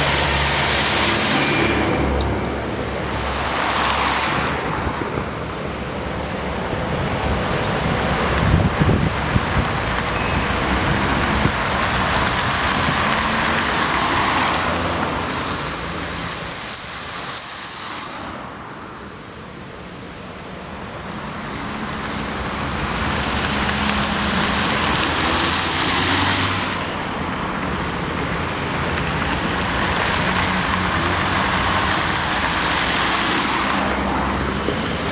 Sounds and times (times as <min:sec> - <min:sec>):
Car: 0:00.0 - 0:35.1
Traffic noise, roadway noise: 0:00.0 - 0:35.1.